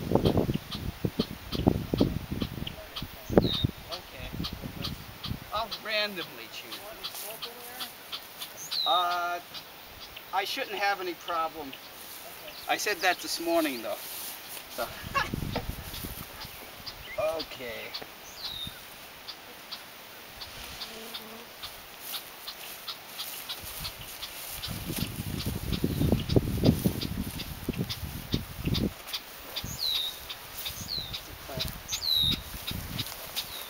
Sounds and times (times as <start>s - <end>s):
Outside, rural or natural: 0.0s - 33.7s
Bee, wasp, etc.: 0.2s - 33.7s
Speech: 17.2s - 18.0s.